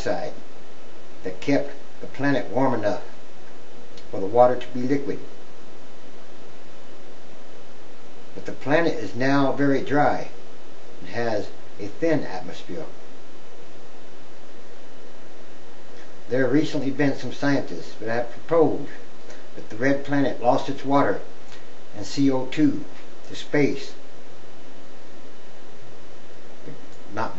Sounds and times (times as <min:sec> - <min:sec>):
Speech: 0:00.0 - 0:00.4, 0:01.2 - 0:03.2, 0:04.0 - 0:05.3, 0:08.4 - 0:10.4, 0:11.0 - 0:13.0, 0:16.3 - 0:21.3, 0:22.0 - 0:24.0, 0:26.6 - 0:27.3.